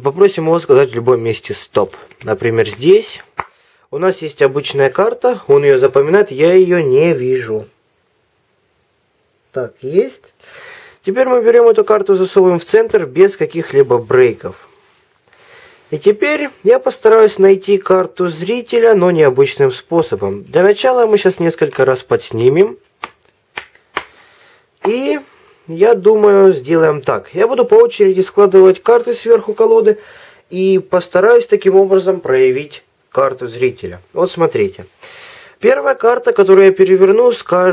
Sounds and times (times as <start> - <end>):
Speech: 0.0 - 3.3, 3.9 - 7.8, 9.5 - 10.3, 11.0 - 14.7, 15.9 - 22.8, 24.8 - 34.9, 35.6 - 37.7.